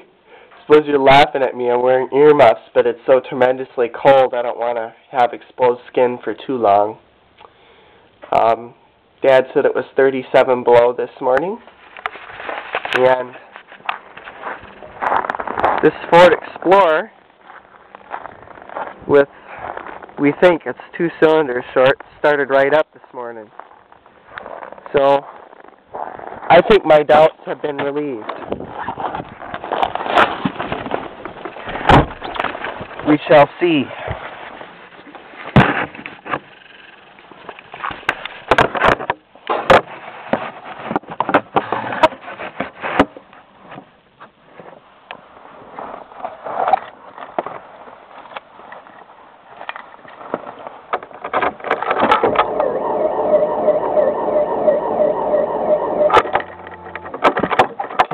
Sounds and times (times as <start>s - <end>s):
Speech: 0.6s - 7.0s, 8.3s - 11.7s, 13.0s - 13.4s, 15.8s - 17.2s, 19.1s - 19.3s, 20.2s - 23.5s, 24.9s - 25.2s, 26.5s - 28.3s, 33.0s - 34.1s.